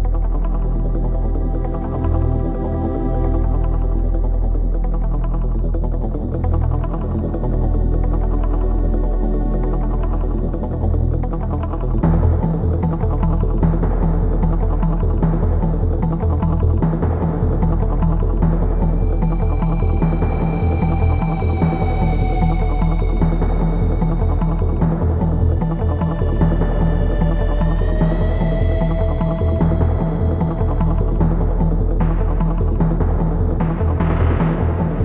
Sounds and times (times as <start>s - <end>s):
Video game music: 0.0s - 35.0s.